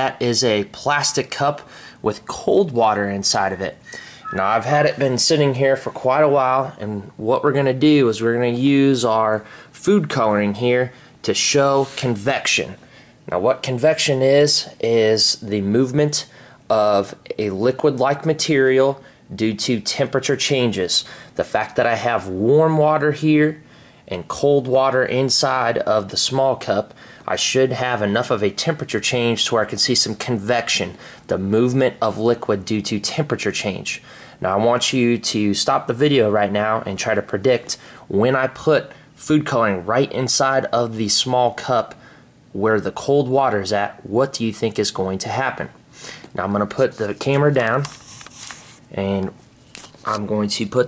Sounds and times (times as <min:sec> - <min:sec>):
Speech: 0:00.0 - 0:45.8, 0:46.4 - 0:48.0, 0:48.9 - 0:49.4, 0:50.0 - 0:50.8.